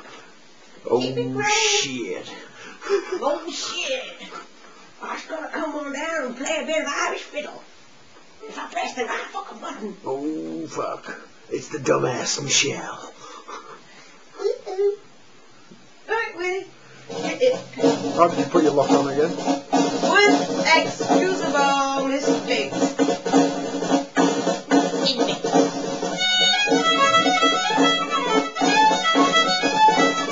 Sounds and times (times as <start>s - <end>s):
Speech: 18.2s - 19.3s
Musical instrument: 24.2s - 30.3s.